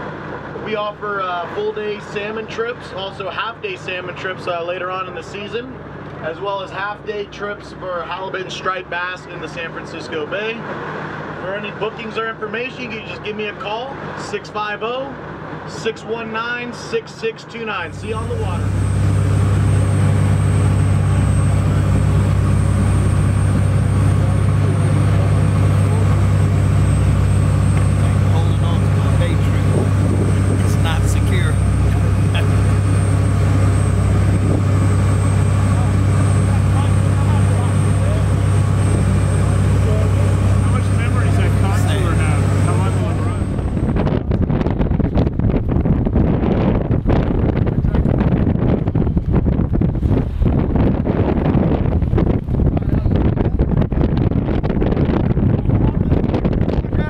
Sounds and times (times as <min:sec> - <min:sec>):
Motorboat, speedboat: 0:00.0 - 0:57.0.